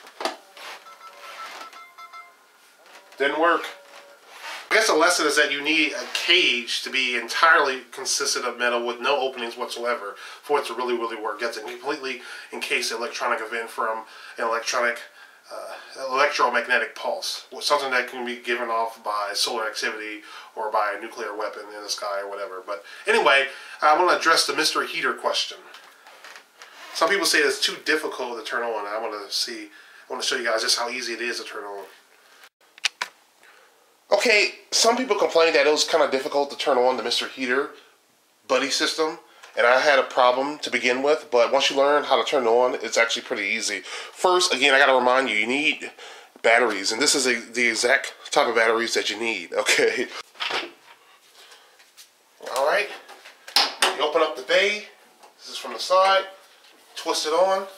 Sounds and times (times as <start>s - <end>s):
Speech: 3.2s - 3.8s, 4.7s - 25.8s, 26.9s - 32.0s, 34.1s - 37.8s, 38.5s - 50.2s, 52.4s - 53.1s, 53.8s - 57.7s.